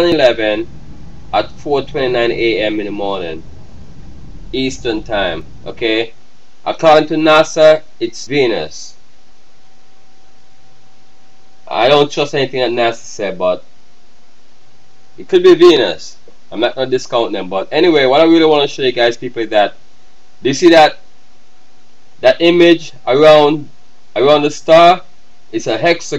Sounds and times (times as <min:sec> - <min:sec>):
Speech: 0:00.0 - 0:00.7, 0:01.4 - 0:03.4, 0:04.6 - 0:09.0, 0:11.7 - 0:13.6, 0:15.2 - 0:19.8, 0:20.4 - 0:21.0, 0:22.2 - 0:26.1.